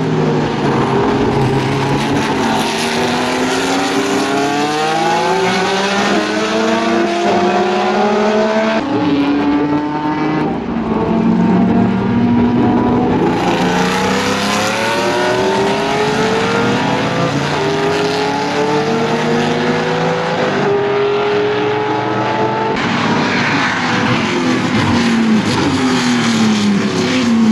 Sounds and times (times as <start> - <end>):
Race car, auto racing: 0.0 - 27.5.